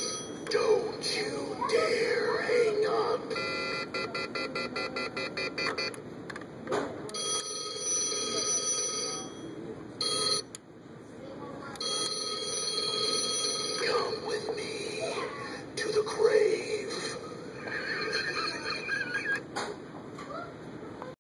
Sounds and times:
Telephone bell ringing: 0.0 - 0.4, 7.2 - 10.5, 11.8 - 14.1
Speech: 13.8 - 17.2.

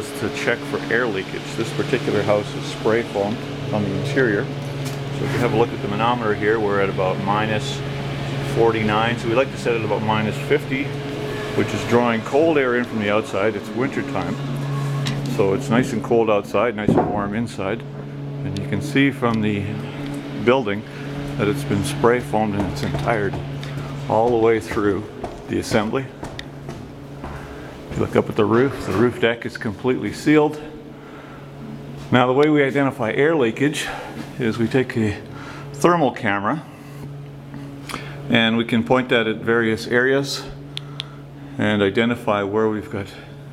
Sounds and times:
Speech: 0.0 - 4.6, 5.2 - 11.0, 11.6 - 14.5, 15.3 - 26.2, 28.0 - 30.8, 32.1 - 36.7, 38.3 - 40.6, 41.6 - 43.4.

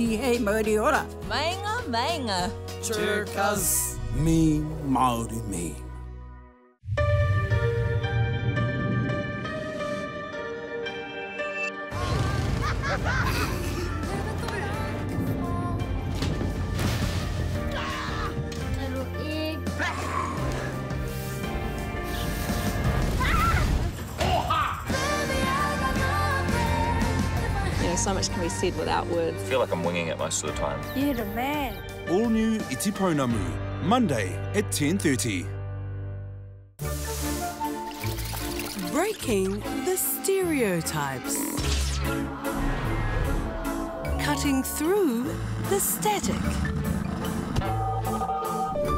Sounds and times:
Music: 0.0 - 48.9.

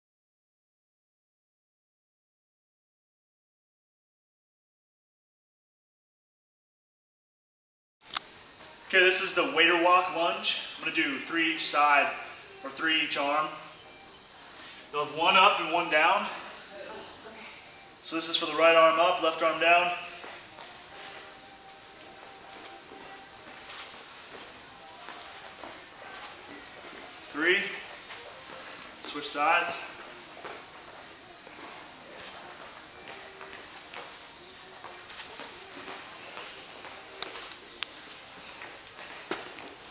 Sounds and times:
Music: 8.0 - 39.9.

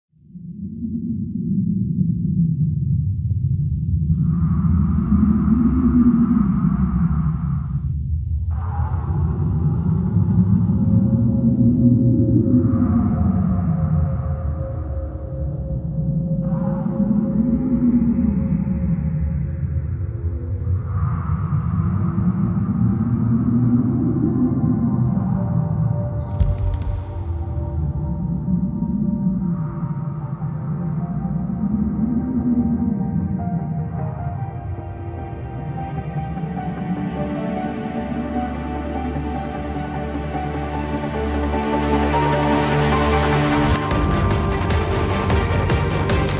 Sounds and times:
Outside, rural or natural: 0.1 - 46.3
Music: 4.3 - 46.3.

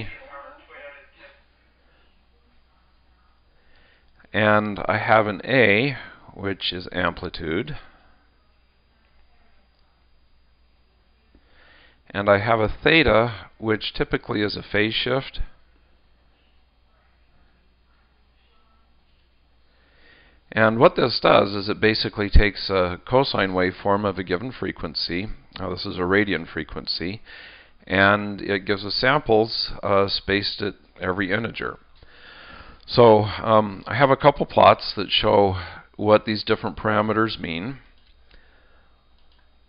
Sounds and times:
Speech: 0.0 - 1.5, 4.2 - 10.1, 12.1 - 15.6, 20.5 - 27.2, 27.8 - 31.8, 32.9 - 37.9.

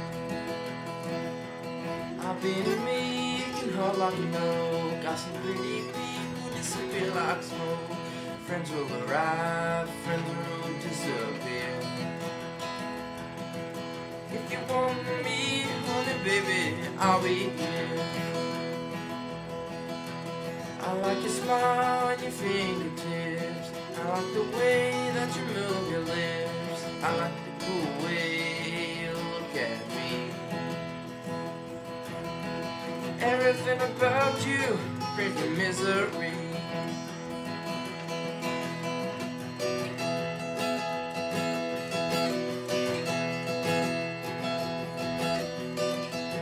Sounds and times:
Music: 0.0 - 46.4.

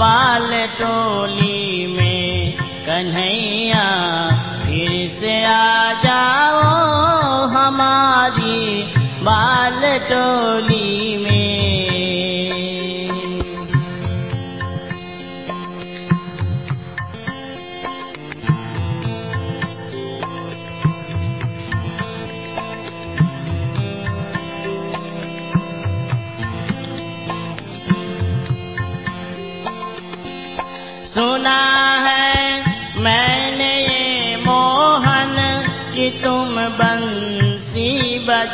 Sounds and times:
Music: 0.0 - 38.5.

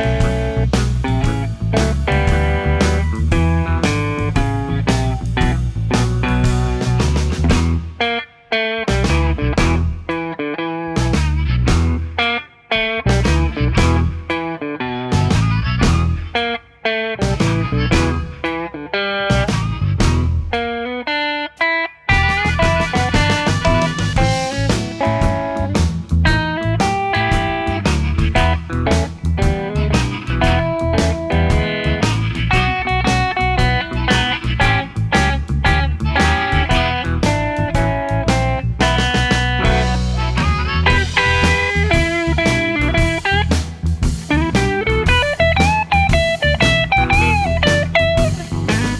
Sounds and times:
Strum: 0.0 - 21.0, 22.1 - 48.9
Blues: 0.0 - 48.9
Electric guitar: 0.0 - 48.9.

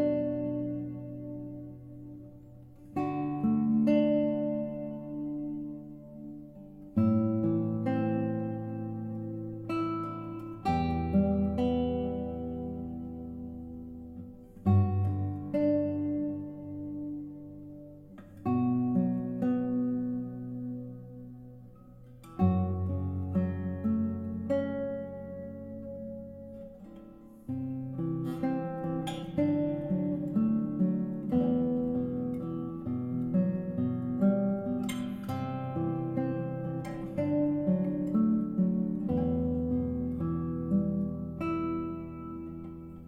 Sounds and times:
Acoustic guitar: 0.0 - 43.0
Strum: 0.0 - 43.0.

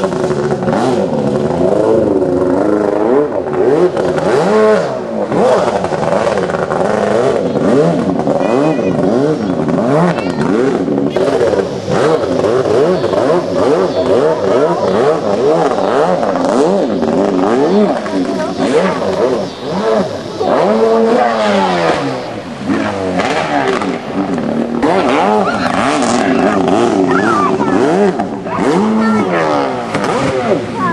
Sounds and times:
Speech: 8.4 - 9.2, 10.0 - 10.6, 20.2 - 22.2, 24.9 - 30.9.

